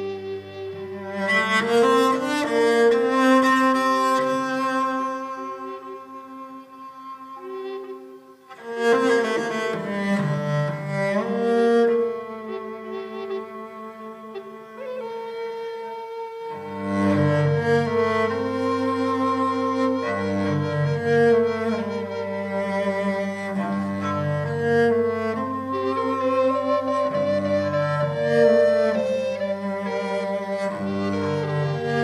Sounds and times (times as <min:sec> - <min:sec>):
Double bass: 0:16.7 - 0:32.0.